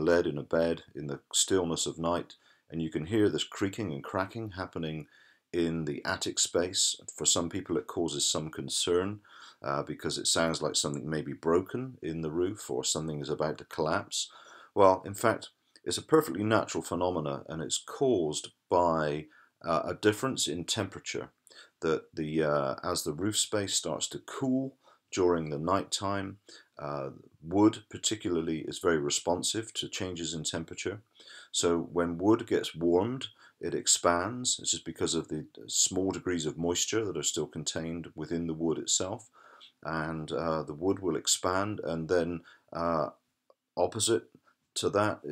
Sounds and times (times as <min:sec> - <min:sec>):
Speech: 0:00.0 - 0:43.2, 0:43.8 - 0:45.3.